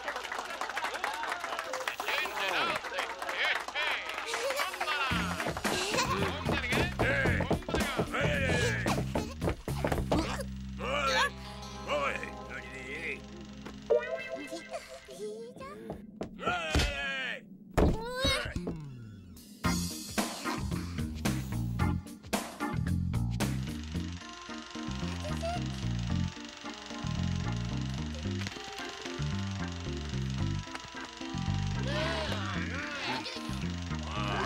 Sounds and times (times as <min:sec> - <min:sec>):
Music: 0:05.0 - 0:15.2, 0:18.8 - 0:34.4.